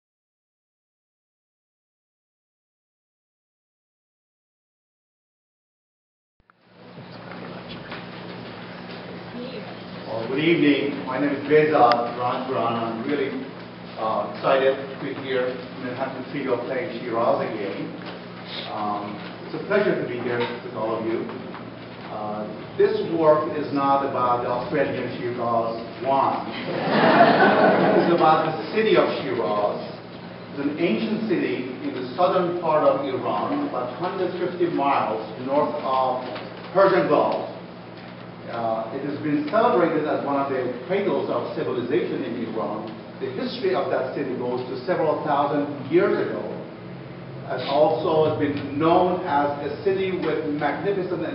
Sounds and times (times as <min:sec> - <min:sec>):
Inside, large room or hall: 0:06.6 - 0:51.3
Speech: 0:09.3 - 0:21.4, 0:22.1 - 0:26.6, 0:27.8 - 0:37.6, 0:38.5 - 0:46.7, 0:47.5 - 0:51.3.